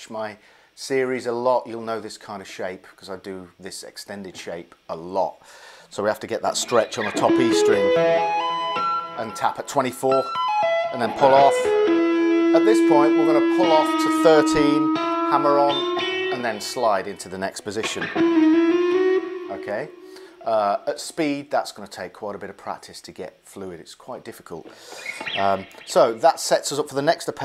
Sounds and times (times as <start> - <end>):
Speech: 0.0 - 8.0, 9.2 - 11.7, 12.6 - 18.1, 19.5 - 24.7, 25.4 - 27.4
Tapping (guitar technique): 6.5 - 20.5, 24.7 - 26.5.